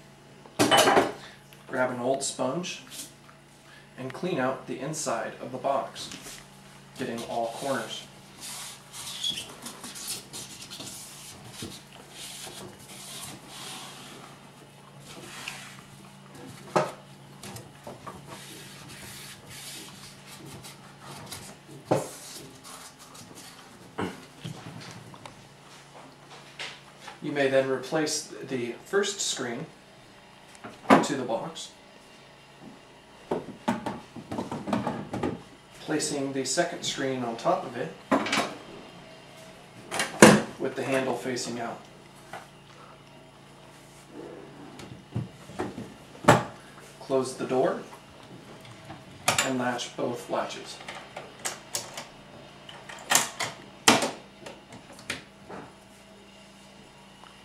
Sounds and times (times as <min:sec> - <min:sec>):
Speech: 0:01.7 - 0:03.0, 0:04.0 - 0:06.2, 0:07.0 - 0:08.1, 0:27.2 - 0:29.8, 0:30.9 - 0:31.8, 0:35.8 - 0:38.0, 0:40.6 - 0:41.9, 0:47.0 - 0:47.9, 0:49.3 - 0:50.8.